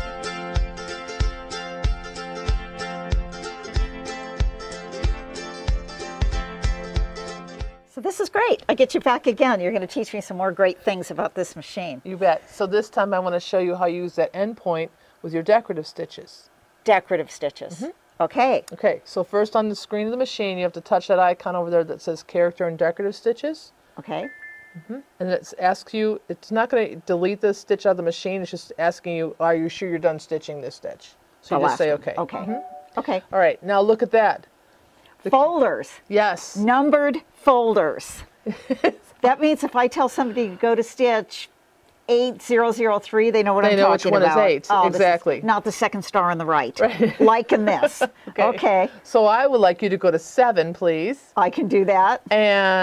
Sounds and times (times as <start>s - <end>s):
Speech: 8.0s - 24.3s, 24.9s - 34.4s, 42.1s - 52.8s.